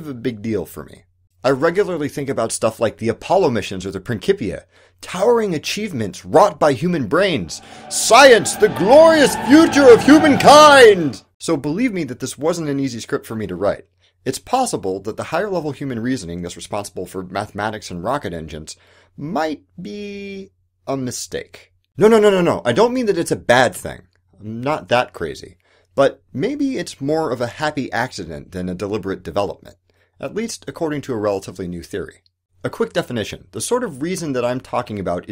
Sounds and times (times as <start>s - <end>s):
Narration, monologue: 0.0s - 35.3s.